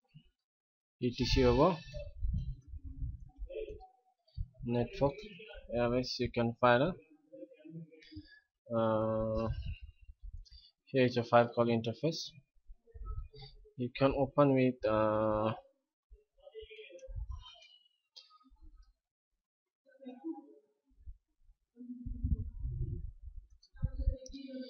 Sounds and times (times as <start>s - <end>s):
Speech: 1.0s - 2.2s, 4.6s - 8.0s, 8.7s - 9.8s, 11.0s - 12.4s, 13.8s - 15.7s, 16.4s - 17.7s.